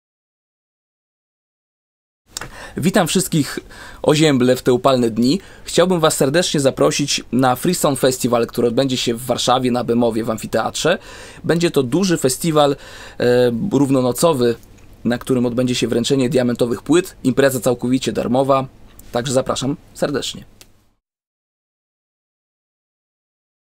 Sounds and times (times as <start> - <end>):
Speech: 2.8 - 20.5.